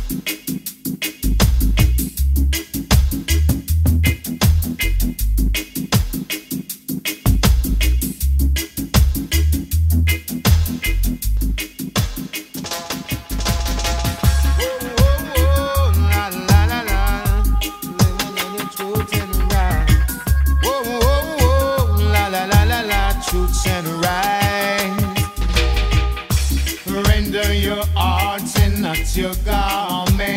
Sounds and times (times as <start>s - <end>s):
Music of Africa: 0.0s - 30.3s
Reggae: 0.0s - 30.3s.